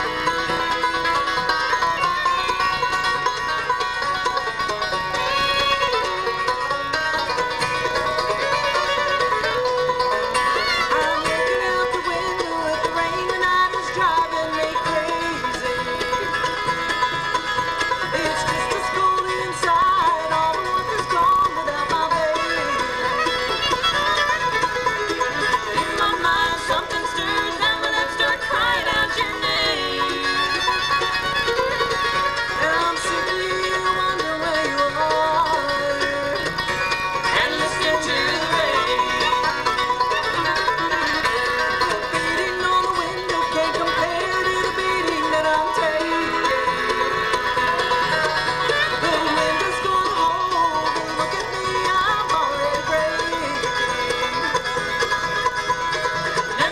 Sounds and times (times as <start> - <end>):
Music: 0.0 - 56.7.